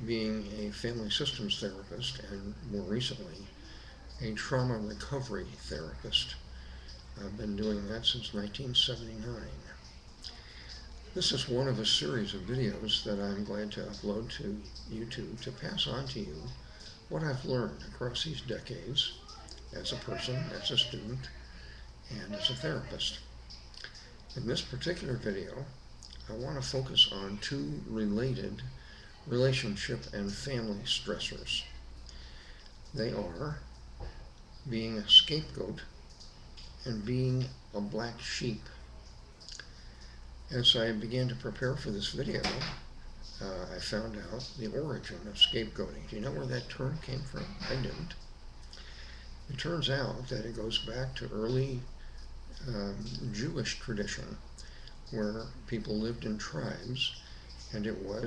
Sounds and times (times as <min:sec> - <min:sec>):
Speech: 0:00.0 - 0:31.8, 0:32.9 - 0:33.7, 0:34.6 - 0:36.0, 0:36.8 - 0:39.7, 0:40.5 - 0:48.2, 0:49.5 - 0:51.9, 0:52.6 - 0:54.4, 0:55.1 - 0:58.2.